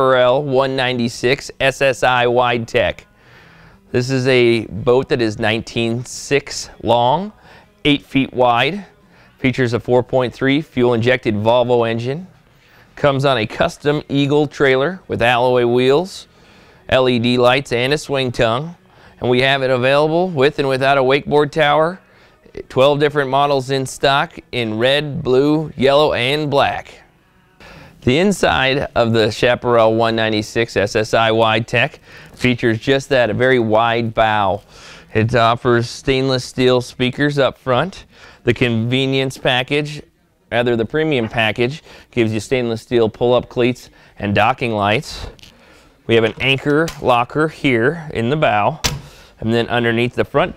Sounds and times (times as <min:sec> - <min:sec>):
Speech: 0:00.0 - 0:03.1, 0:03.9 - 0:12.3, 0:13.0 - 0:16.3, 0:16.9 - 0:27.0, 0:28.0 - 0:45.4, 0:46.1 - 0:48.8, 0:49.4 - 0:50.5.